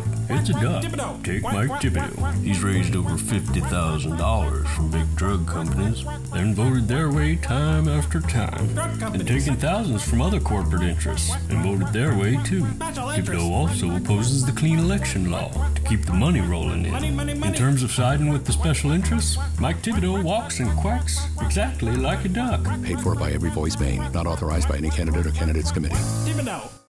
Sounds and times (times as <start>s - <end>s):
Music: 0.0s - 26.9s
Speech: 0.3s - 26.8s.